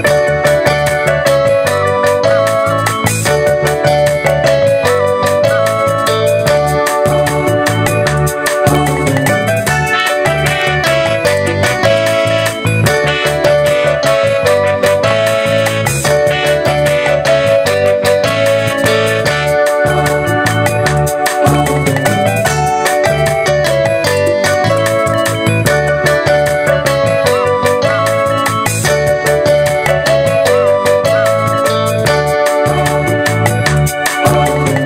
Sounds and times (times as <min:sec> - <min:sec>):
Music: 0:00.0 - 0:34.8.